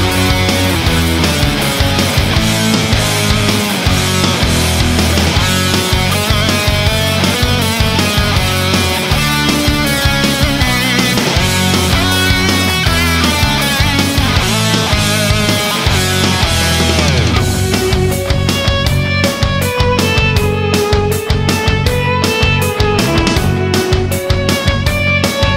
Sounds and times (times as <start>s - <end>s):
Soundtrack music: 0.0s - 25.5s.